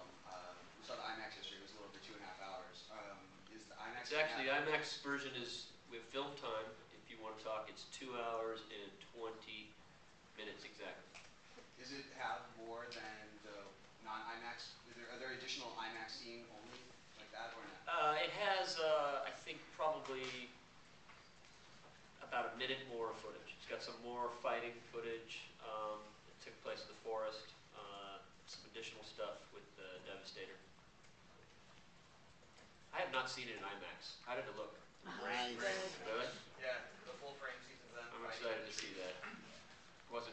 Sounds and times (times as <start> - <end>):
Speech: 0.0 - 9.8, 10.4 - 11.1, 11.7 - 20.6, 22.2 - 30.7, 32.9 - 39.5, 40.1 - 40.3.